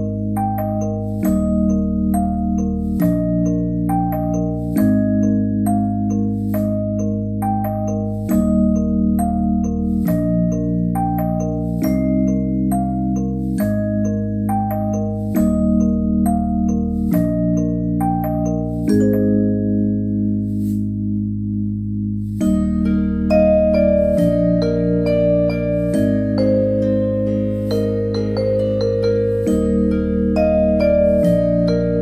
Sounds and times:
Music: 0.0 - 32.0.

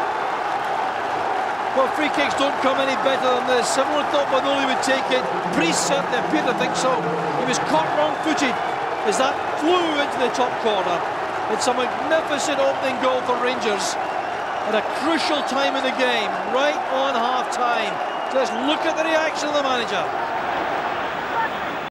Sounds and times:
Speech: 1.8 - 14.0, 14.7 - 20.1.

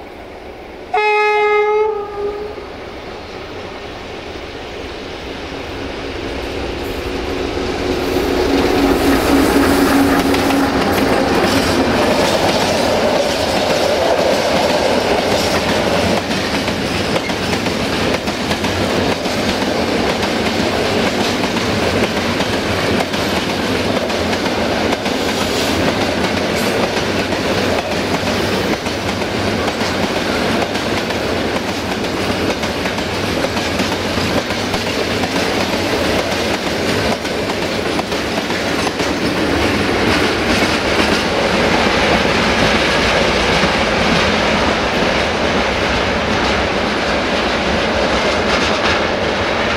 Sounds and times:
Railroad car, train wagon: 0.0 - 49.7
Train: 0.0 - 49.7.

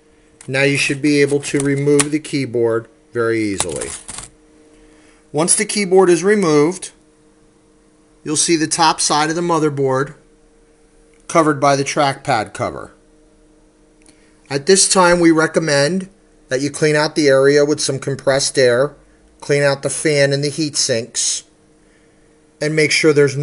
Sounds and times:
Inside, small room: 0.0 - 23.4
Speech: 0.5 - 4.0, 5.4 - 7.0, 8.2 - 10.2, 11.3 - 13.0, 14.5 - 21.6, 22.6 - 23.4.

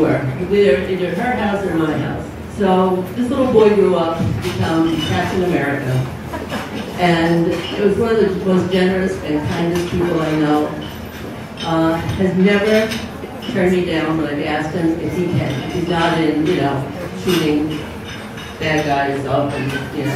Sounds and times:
Female speech, woman speaking: 0.0 - 6.1, 7.0 - 10.8, 11.6 - 17.9, 18.6 - 20.1
Narration, monologue: 0.0 - 20.1.

